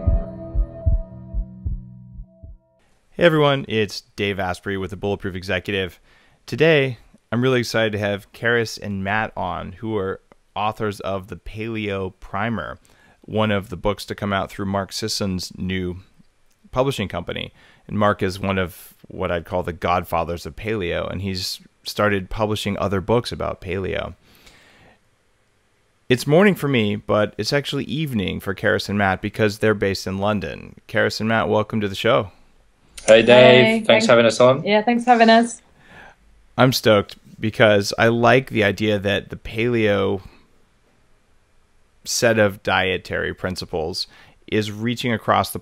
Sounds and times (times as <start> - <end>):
Speech: 3.2 - 16.1, 16.7 - 24.2, 26.1 - 32.4, 33.0 - 35.6, 36.6 - 40.4, 42.1 - 45.6.